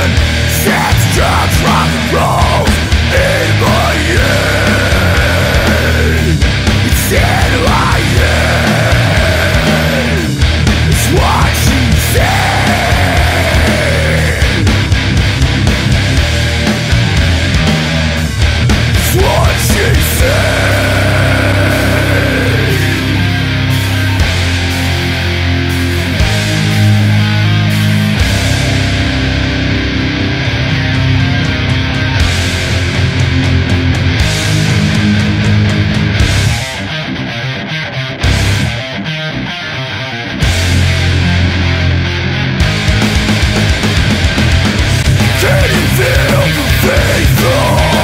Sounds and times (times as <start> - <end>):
Music: 0.0 - 48.0.